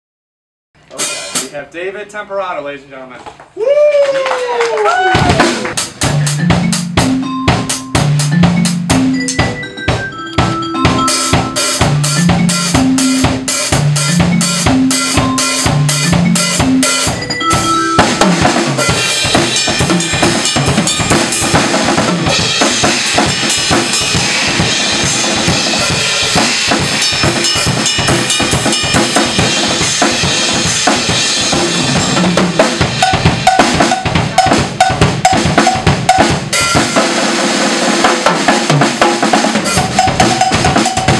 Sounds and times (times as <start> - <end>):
Drum kit: 0.8 - 2.4, 4.4 - 41.1
Bass drum: 5.2 - 37.0, 38.2 - 41.1.